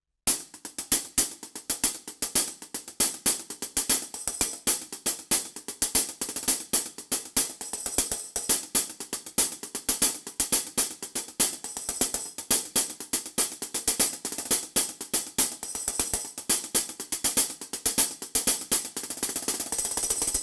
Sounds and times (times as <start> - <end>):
Music: 0.2 - 20.4.